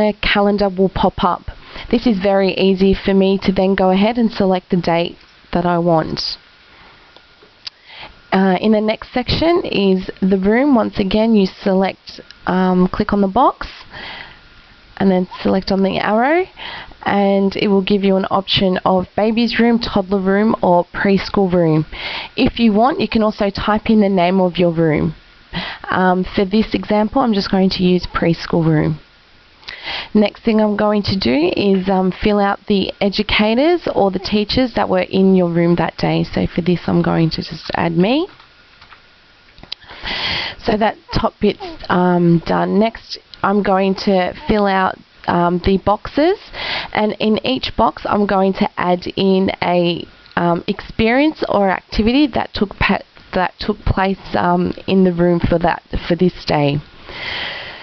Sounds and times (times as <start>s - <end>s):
Speech: 0.0s - 6.4s, 8.3s - 13.8s, 15.0s - 25.2s, 25.8s - 29.0s, 30.2s - 38.4s, 40.6s - 56.9s.